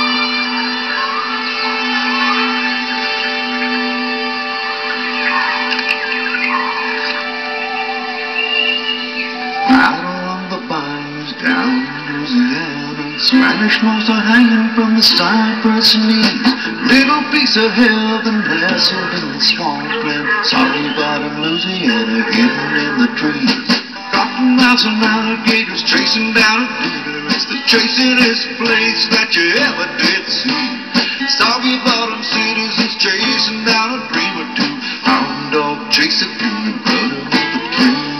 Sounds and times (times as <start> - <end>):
Music: 0.0 - 38.1.